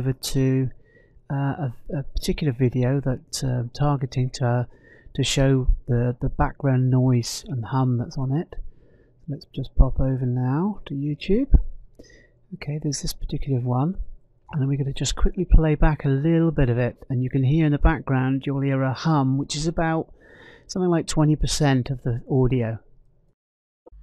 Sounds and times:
Speech: 0.0 - 8.6, 9.3 - 11.7, 12.6 - 20.1, 20.7 - 22.8.

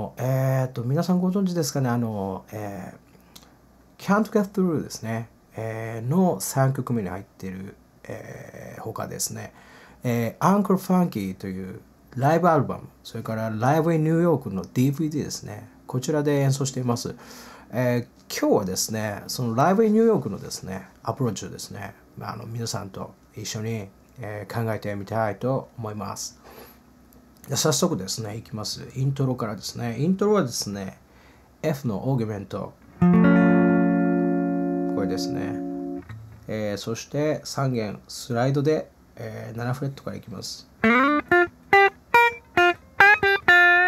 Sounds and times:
Speech: 0.0 - 3.0, 4.0 - 26.4, 27.4 - 31.0, 31.6 - 32.8, 35.0 - 35.6, 36.5 - 40.7.

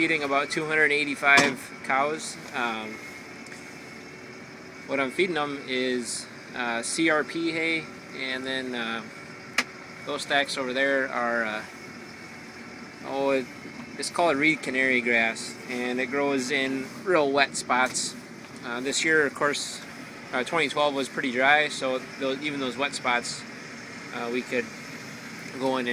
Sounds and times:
Speech: 0.0 - 3.0, 4.9 - 9.1, 10.1 - 11.7, 13.0 - 23.5, 24.1 - 24.7, 25.5 - 25.9.

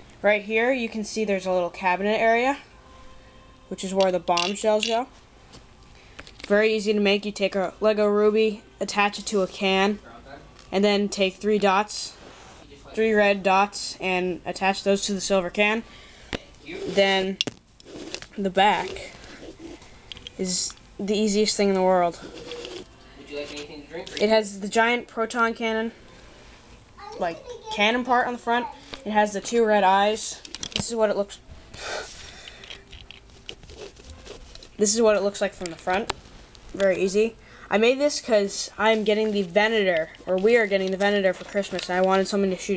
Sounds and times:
Inside, small room: 0.0 - 42.7.

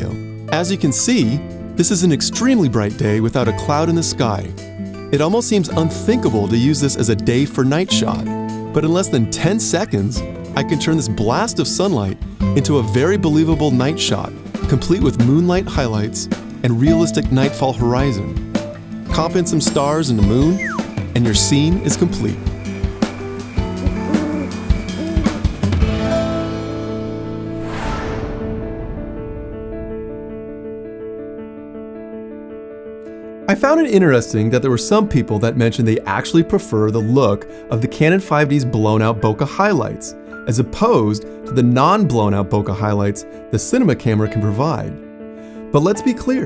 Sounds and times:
Drum kit: 11.9 - 27.0.

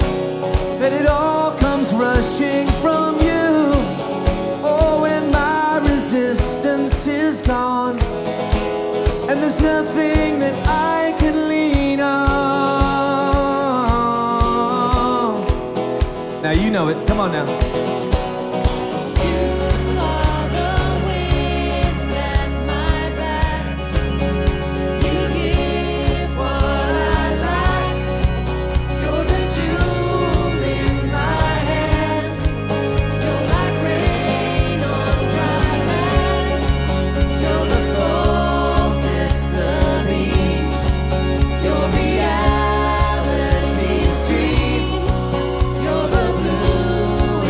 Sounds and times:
Music: 0.0 - 47.4.

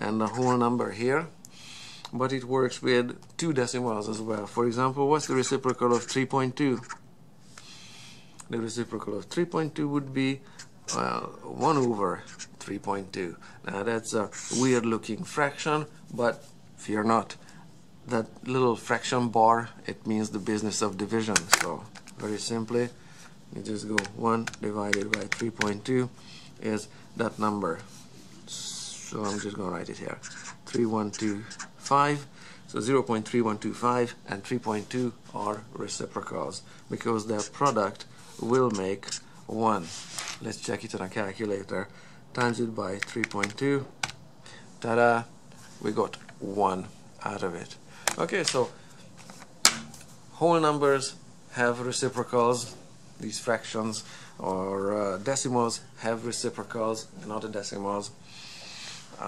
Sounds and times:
Speech: 0.0 - 1.4, 2.1 - 7.0, 8.4 - 17.4, 18.0 - 27.9, 28.5 - 43.9, 44.8 - 48.8, 50.3 - 58.2
Inside, small room: 0.0 - 59.2.

